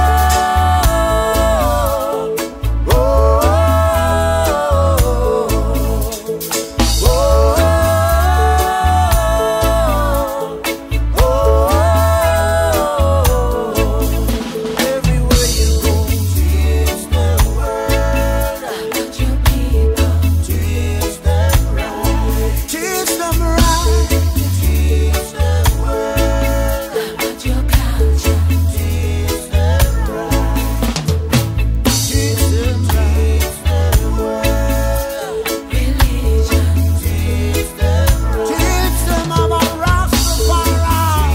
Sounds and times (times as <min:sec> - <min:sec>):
Soul music: 0:00.0 - 0:41.3.